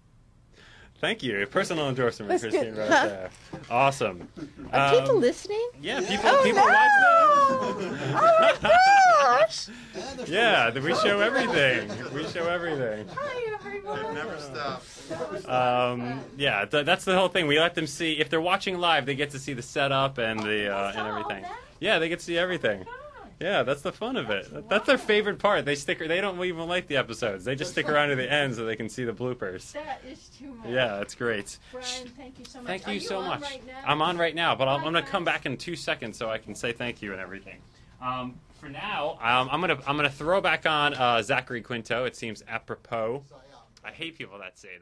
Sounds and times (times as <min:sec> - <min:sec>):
Snicker: 0:06.0 - 0:09.0, 0:10.0 - 0:14.2.